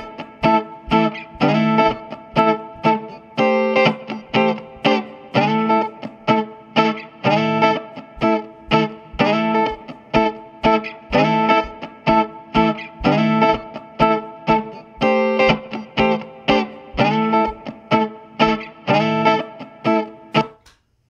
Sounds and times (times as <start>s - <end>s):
Strum: 0.0s - 20.7s
Electric guitar: 0.0s - 20.8s.